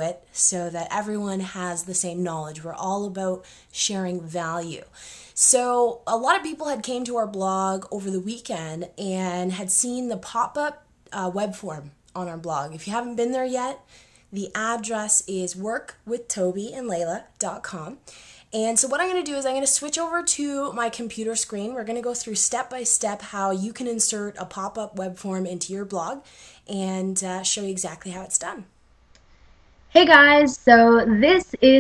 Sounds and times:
Speech: 0.0 - 13.8, 14.4 - 18.0, 18.6 - 28.7, 30.0 - 31.8.

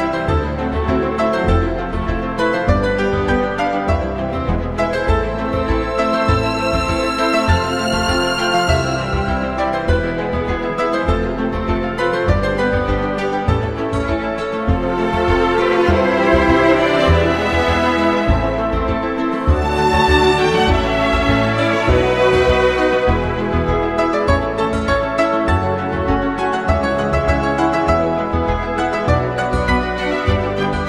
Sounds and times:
Theme music: 0.0 - 12.0, 12.6 - 30.8.

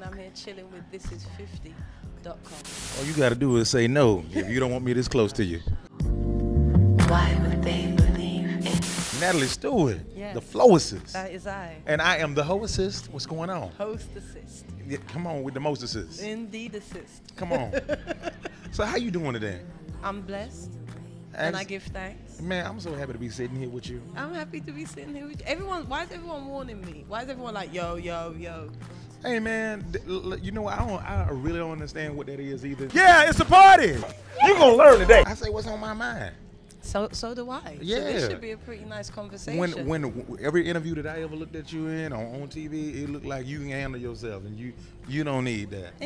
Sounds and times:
Music: 0.0 - 46.0
Speech: 9.2 - 17.8, 21.4 - 28.0, 29.2 - 36.4, 37.4 - 44.5.

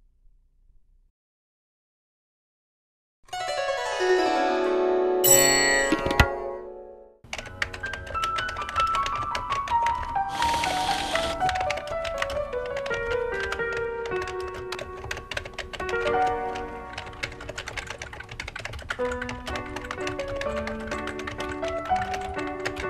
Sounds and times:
Music: 3.3 - 22.9
Printer: 10.3 - 11.4.

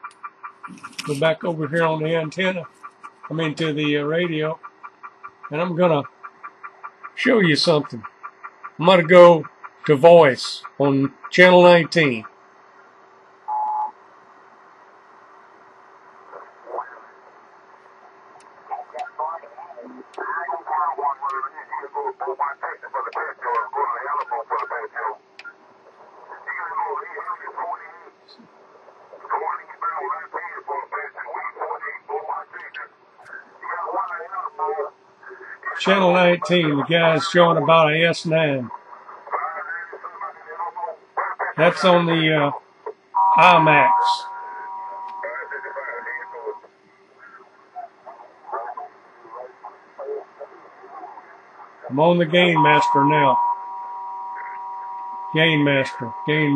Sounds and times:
Radio: 0.0 - 4.7, 5.3 - 8.1, 8.7 - 12.9, 13.5 - 56.5
Speech: 1.0 - 2.7, 3.3 - 4.6, 5.5 - 6.1, 7.2 - 8.0, 8.8 - 12.3, 19.0 - 25.2, 26.4 - 28.4, 33.6 - 42.6, 43.4 - 44.3, 51.9 - 53.4, 55.3 - 56.5.

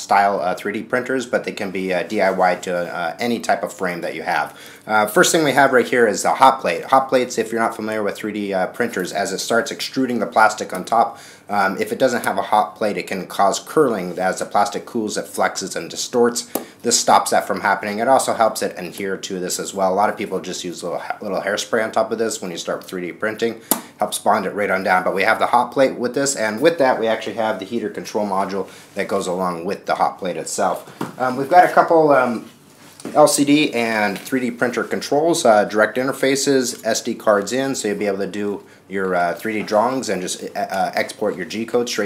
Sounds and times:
Speech: 0.0 - 42.0.

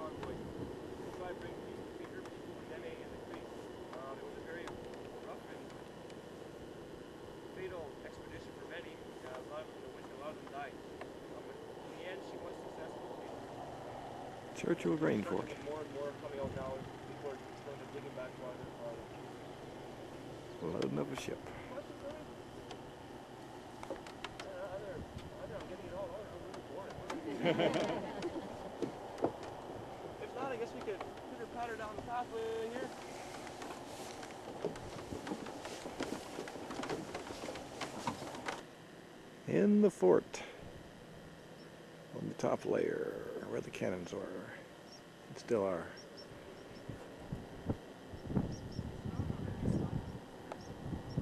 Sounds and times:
Speech: 1.1 - 5.8, 7.6 - 13.4, 14.6 - 19.2, 20.6 - 22.3, 24.4 - 27.3, 30.2 - 33.0, 39.5 - 40.6, 42.2 - 44.7, 45.3 - 46.0, 49.1 - 50.1.

